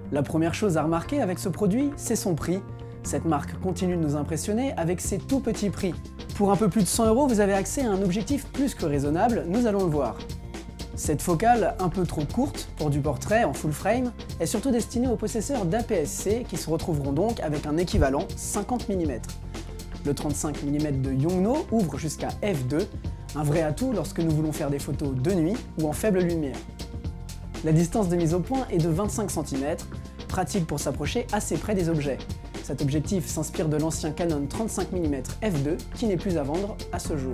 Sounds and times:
Music: 0.0s - 37.3s
Speech: 0.1s - 10.2s, 11.0s - 19.4s, 20.0s - 26.6s, 27.6s - 37.3s.

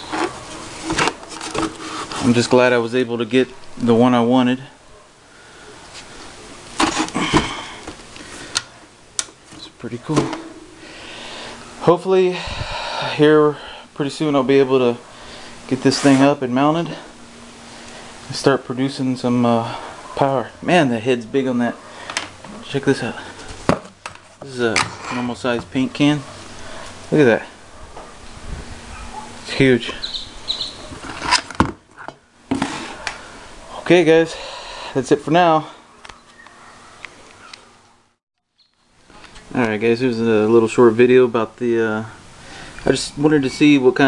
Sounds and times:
Speech: 2.2s - 4.8s, 9.6s - 10.3s, 11.8s - 12.5s, 13.1s - 15.0s, 15.7s - 17.1s, 18.3s - 21.8s, 22.5s - 23.3s, 24.4s - 26.3s, 27.1s - 27.6s, 29.5s - 30.0s, 33.8s - 34.4s, 35.0s - 35.8s, 39.5s - 42.2s, 42.8s - 44.0s.

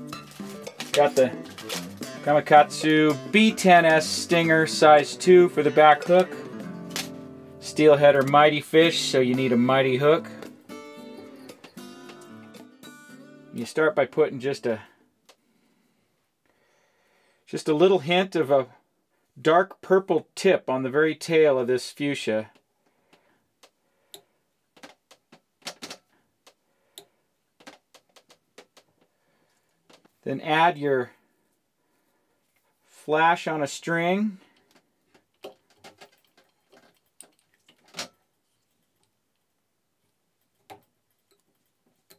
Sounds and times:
Music: 0.0s - 14.7s
Speech: 1.0s - 1.4s, 2.3s - 6.4s, 7.6s - 10.4s, 13.6s - 15.0s, 17.5s - 18.8s, 19.4s - 22.6s, 30.2s - 31.2s, 33.0s - 34.4s.

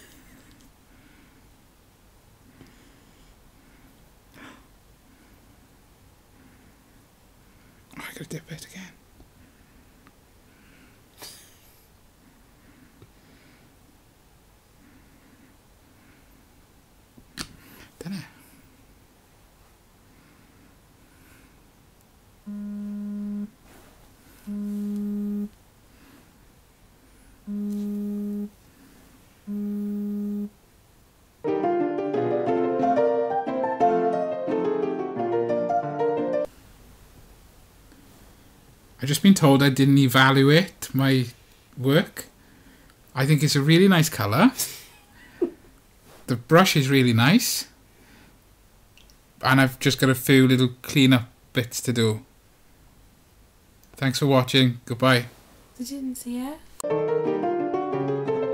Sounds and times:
Inside, small room: 0.0s - 58.5s
Music: 31.5s - 36.5s, 56.8s - 58.5s.

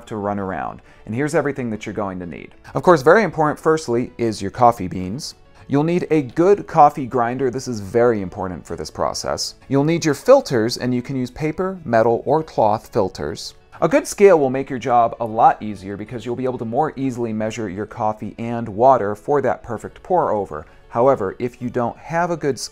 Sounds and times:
Music: 0.0s - 22.7s
Speech: 0.0s - 22.7s.

